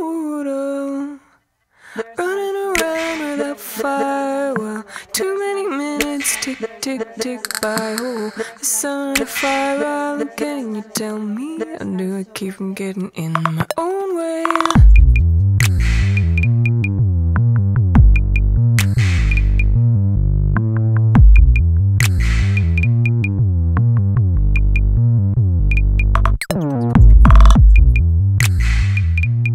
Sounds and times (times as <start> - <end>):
Music: 14.4 - 29.5.